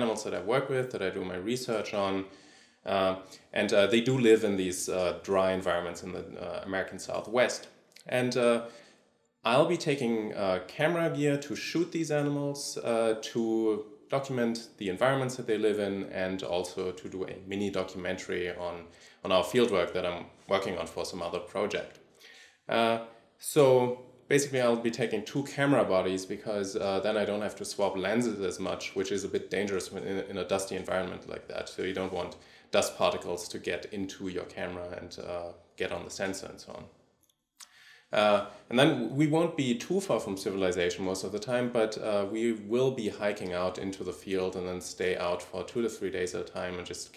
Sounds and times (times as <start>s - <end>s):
Speech: 0.0s - 8.7s, 9.5s - 22.0s, 22.7s - 36.9s, 38.1s - 47.1s.